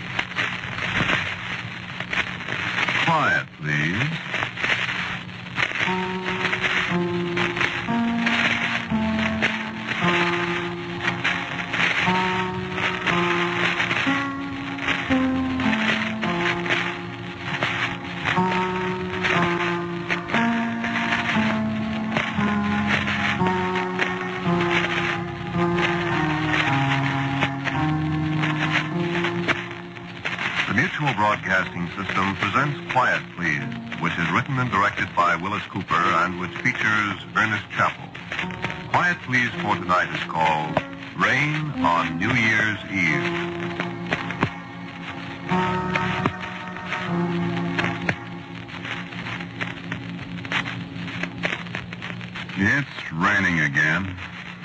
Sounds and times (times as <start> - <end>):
Speech: 3.0 - 4.3, 30.7 - 38.1, 38.9 - 43.4, 52.6 - 54.2
Music: 4.2 - 54.6.